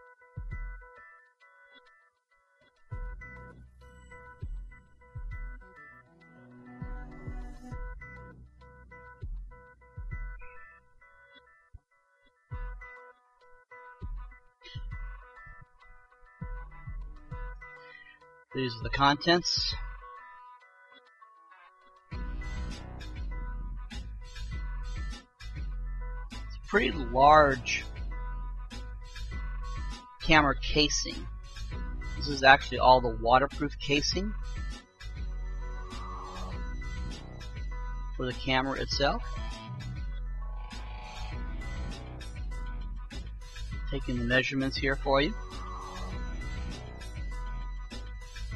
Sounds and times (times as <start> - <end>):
Music: 0.0 - 48.5
Speech: 18.6 - 19.8, 26.7 - 27.9, 30.2 - 31.3, 32.2 - 34.4, 38.2 - 39.2, 43.9 - 45.4.